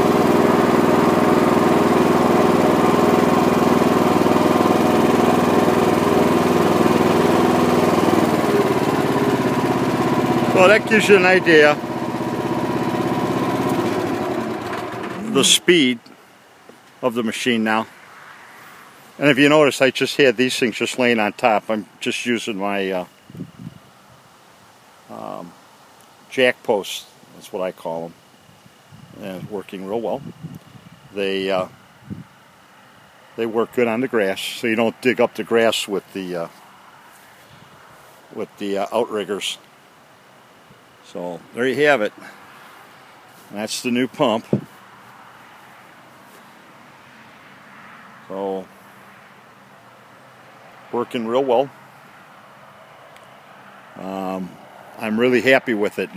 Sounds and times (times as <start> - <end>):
Lawn mower: 0.0 - 15.8, 38.0 - 39.6, 41.1 - 46.5, 53.4 - 56.1
Vehicle: 0.0 - 56.1
Speech: 10.5 - 11.8, 15.2 - 16.1, 17.0 - 17.9, 19.2 - 23.1, 25.1 - 25.6, 26.3 - 28.2, 29.2 - 30.2, 31.2 - 31.8, 33.4 - 36.5, 38.4 - 39.6, 41.0 - 42.3, 43.5 - 44.6, 48.3 - 48.7, 50.9 - 51.8, 54.0 - 56.1.